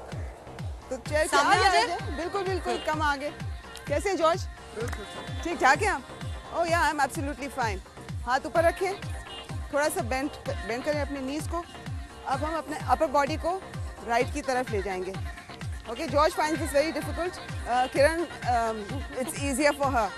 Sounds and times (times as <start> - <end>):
Music: 0.0 - 20.1.